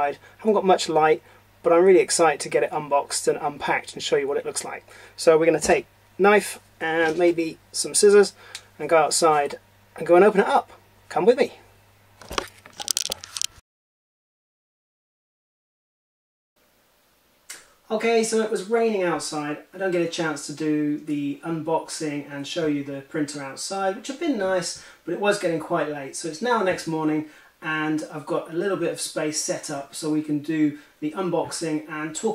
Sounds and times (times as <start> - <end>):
Speech: 0.0 - 11.7, 17.9 - 32.3.